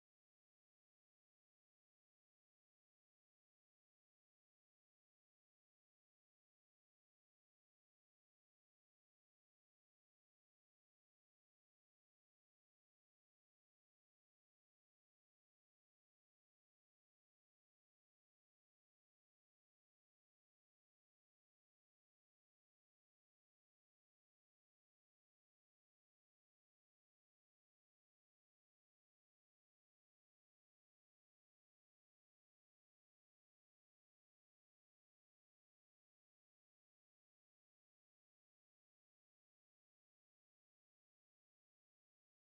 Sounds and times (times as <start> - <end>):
Music: 0.0 - 42.4.